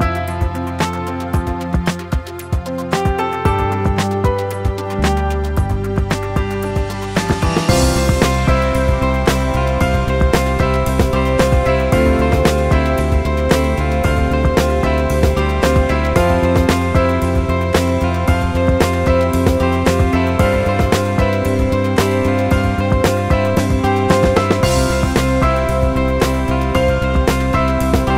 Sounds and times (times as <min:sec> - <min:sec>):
Music: 0:00.0 - 0:28.1.